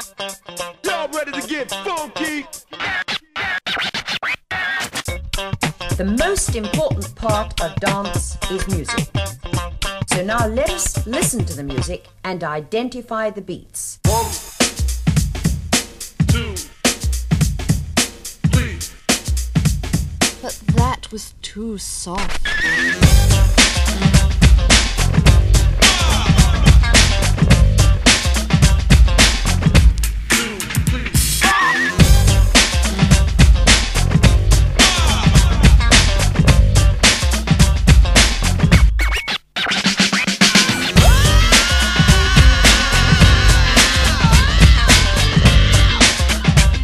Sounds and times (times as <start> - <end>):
Music: 0.0 - 12.2, 14.0 - 21.2, 22.2 - 46.8.